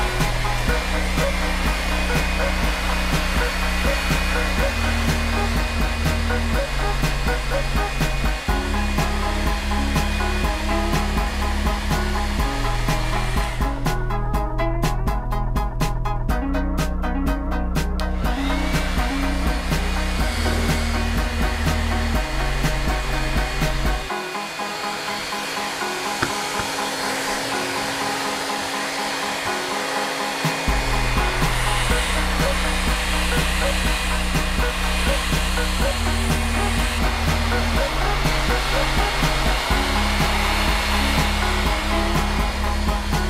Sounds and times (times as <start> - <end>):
Hair dryer: 0.0 - 16.0, 16.8 - 43.2.